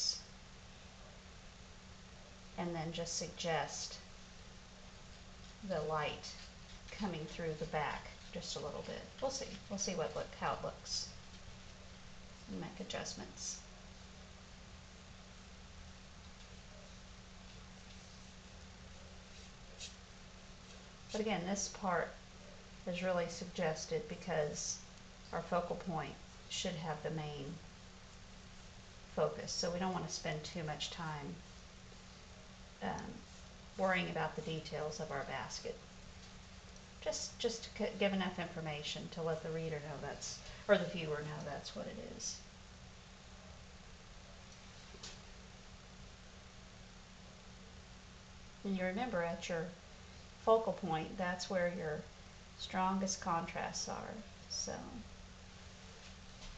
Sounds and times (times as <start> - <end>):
Speech: 0.0 - 0.2, 2.6 - 4.0, 5.6 - 11.1, 12.5 - 13.6, 21.1 - 22.2, 22.9 - 27.6, 29.2 - 31.4, 32.8 - 33.2, 33.8 - 35.8, 37.0 - 42.5, 48.6 - 49.8, 50.5 - 55.1.